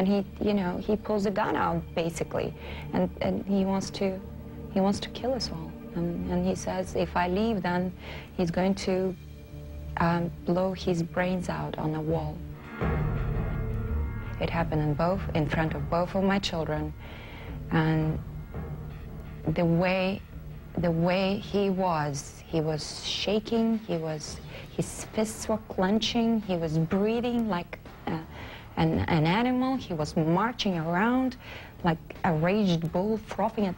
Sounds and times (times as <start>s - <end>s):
Speech: 0.0s - 4.2s, 4.8s - 9.2s, 14.4s - 16.9s, 17.7s - 18.2s, 20.8s - 33.7s
Music: 0.0s - 33.7s.